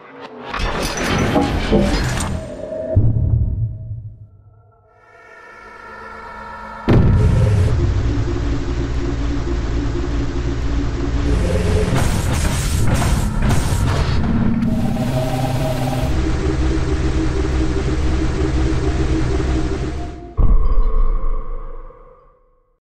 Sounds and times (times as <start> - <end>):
Heavy engine (low frequency): 7.0 - 20.2.